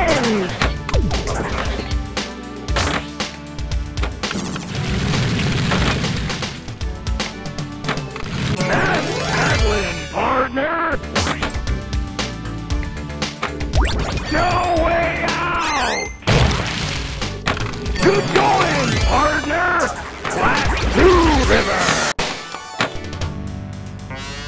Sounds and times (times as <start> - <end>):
Music: 0.0 - 24.4
Speech: 8.7 - 11.0, 14.3 - 16.0, 18.0 - 22.0.